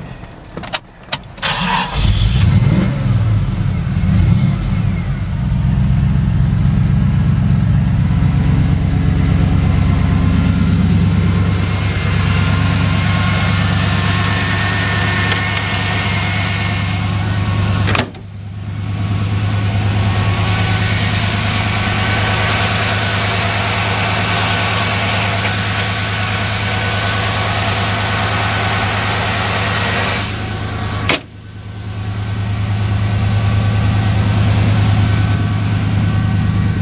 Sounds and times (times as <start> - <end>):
Car: 0.0 - 36.8
Heavy engine (low frequency): 0.0 - 36.8
Idling: 4.6 - 36.8.